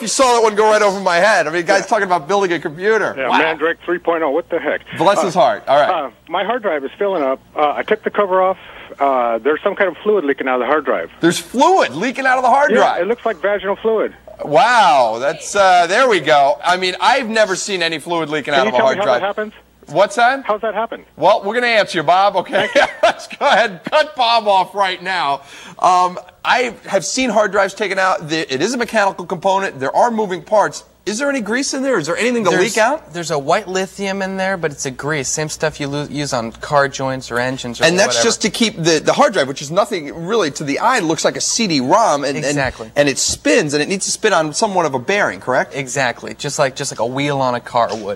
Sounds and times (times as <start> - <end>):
Speech: 0.0 - 22.6, 23.4 - 48.1.